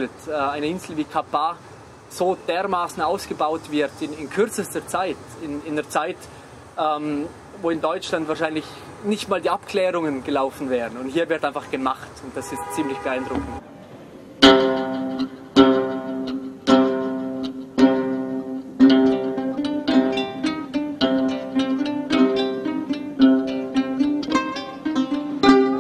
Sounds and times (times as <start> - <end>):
Pizzicato: 14.4 - 25.8.